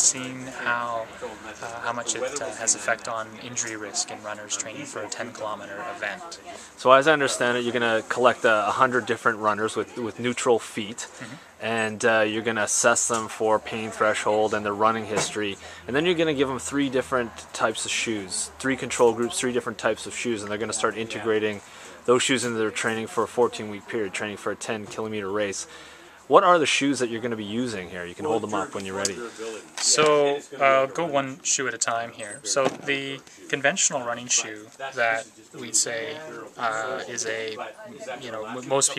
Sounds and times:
Speech: 0.0s - 38.9s.

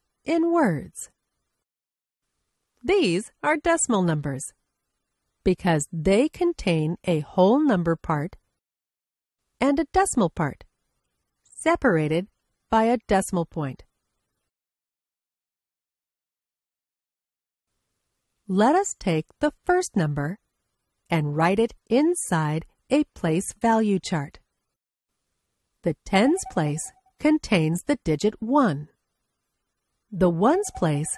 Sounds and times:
Speech: 0.3s - 1.1s, 2.8s - 4.6s, 5.5s - 8.4s, 9.6s - 10.7s, 11.6s - 13.9s, 18.5s - 20.4s, 21.1s - 24.4s, 25.9s - 28.9s, 30.2s - 31.1s.

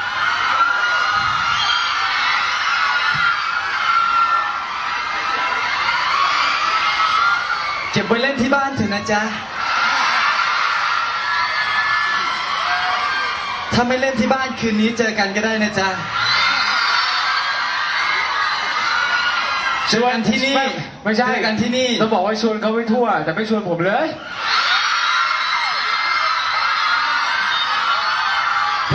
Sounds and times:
Speech: 8.0s - 9.4s, 13.7s - 16.1s, 19.9s - 24.2s.

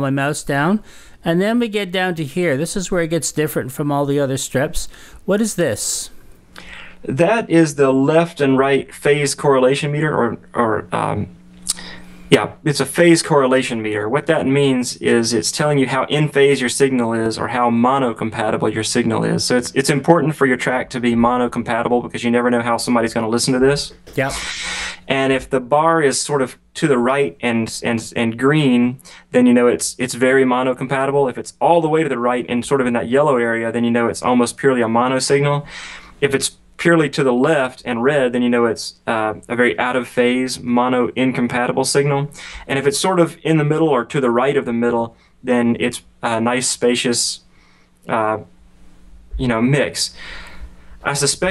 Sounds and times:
Speech: 0.0s - 6.2s, 7.0s - 47.4s, 48.1s - 48.5s, 49.4s - 50.2s, 51.0s - 51.5s.

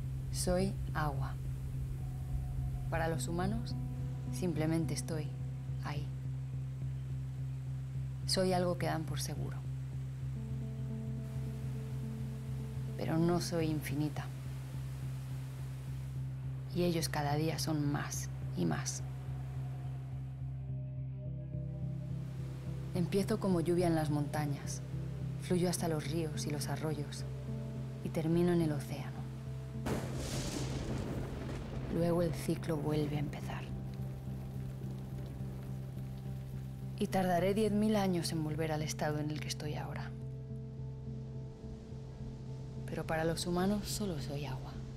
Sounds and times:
Speech: 0.4s - 1.4s, 3.0s - 3.7s, 4.3s - 6.1s, 8.3s - 9.6s, 13.0s - 14.3s, 16.7s - 19.0s, 23.0s - 24.8s, 25.4s - 27.2s, 28.0s - 29.2s, 31.9s - 33.8s, 37.0s - 40.2s, 42.9s - 44.8s.

